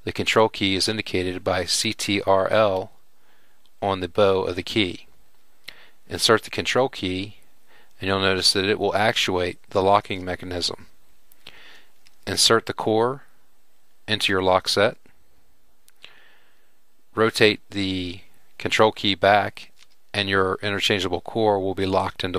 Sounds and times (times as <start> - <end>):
Speech: 0.0 - 2.9, 3.8 - 5.1, 6.1 - 7.4, 8.0 - 10.9, 12.2 - 13.3, 14.1 - 15.1, 17.2 - 22.3.